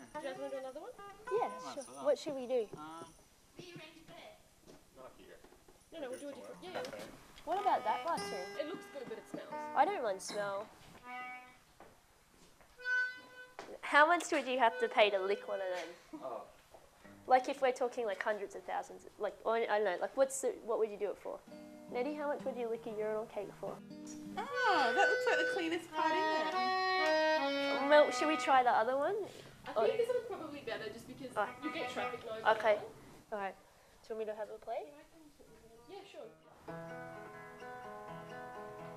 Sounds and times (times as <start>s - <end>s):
Music: 0.0s - 2.5s, 6.2s - 11.7s, 12.8s - 15.9s, 17.0s - 18.4s, 20.8s - 29.0s, 29.7s - 32.8s, 35.8s - 38.9s.